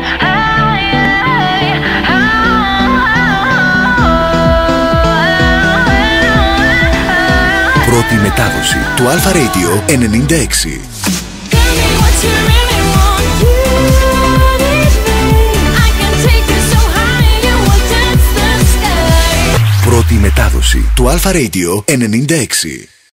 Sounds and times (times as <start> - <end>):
Music: 0.0 - 21.0
Speech: 7.8 - 10.9, 19.7 - 23.0.